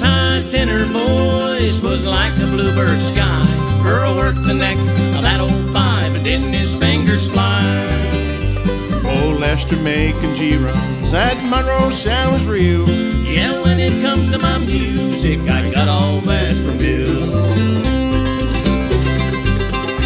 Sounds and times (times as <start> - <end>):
Music: 0.0 - 20.0.